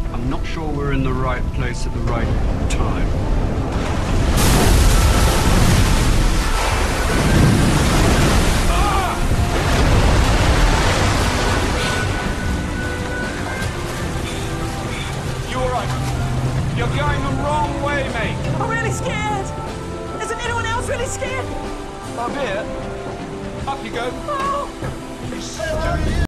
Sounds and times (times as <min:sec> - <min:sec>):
Music: 0:00.0 - 0:26.2.